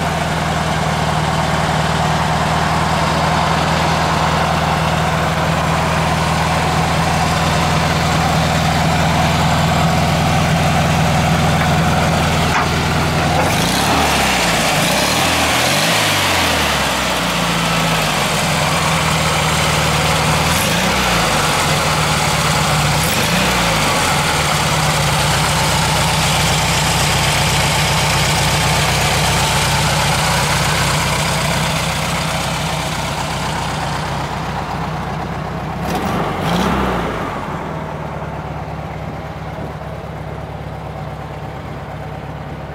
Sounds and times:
Idling: 0.0 - 42.7
Vehicle: 0.0 - 42.7.

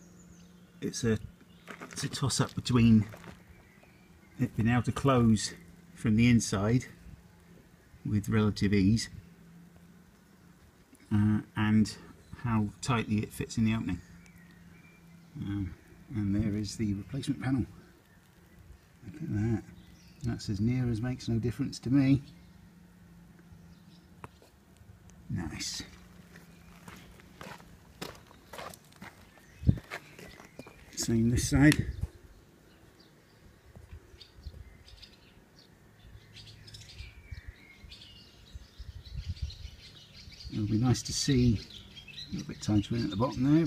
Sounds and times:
Speech: 0.8 - 1.3, 1.9 - 3.2, 4.4 - 7.0, 8.0 - 9.2, 11.0 - 14.1, 15.4 - 17.8, 19.0 - 22.3, 25.3 - 26.0, 30.9 - 32.0, 40.5 - 41.7, 42.3 - 43.6.

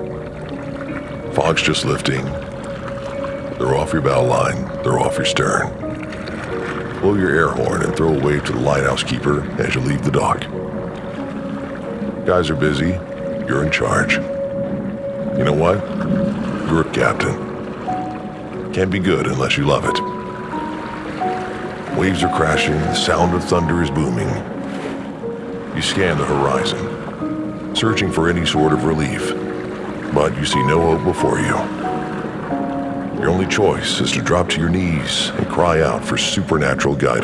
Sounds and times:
Music: 0.0 - 37.2
Speech: 1.4 - 2.4, 3.6 - 5.8, 7.0 - 10.5, 12.3 - 14.3, 15.4 - 15.9, 16.7 - 17.4, 18.7 - 20.1, 21.9 - 24.5, 25.8 - 26.9, 27.8 - 29.4, 30.1 - 31.7, 33.2 - 37.2.

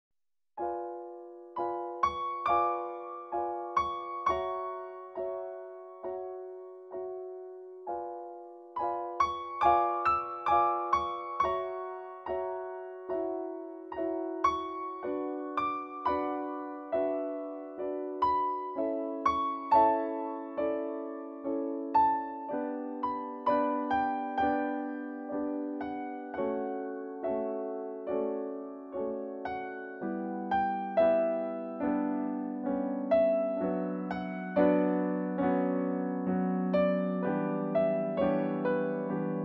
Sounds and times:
Piano: 0.6 - 39.4.

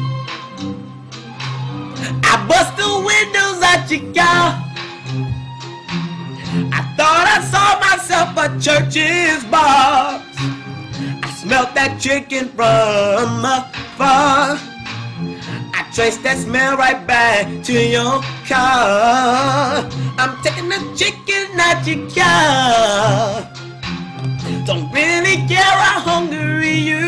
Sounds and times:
Music: 0.0 - 27.0.

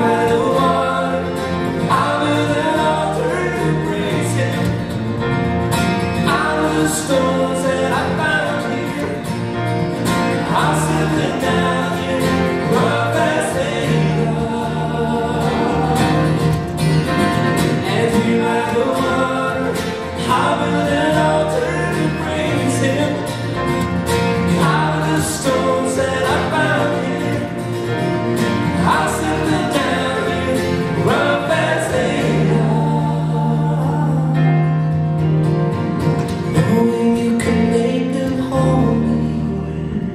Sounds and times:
Music: 0.0 - 40.1.

